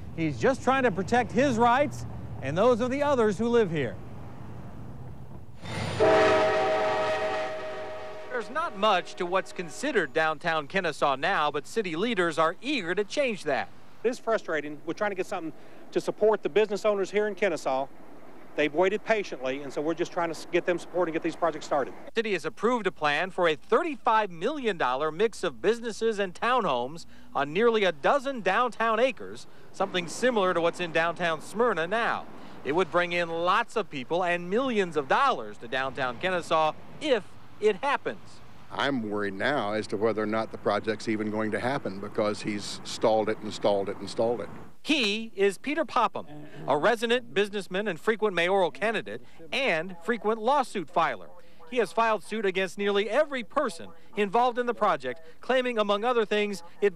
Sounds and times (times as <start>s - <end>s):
Speech: 0.2s - 4.0s, 8.3s - 17.9s, 18.6s - 56.9s
Train horn: 6.0s - 10.0s.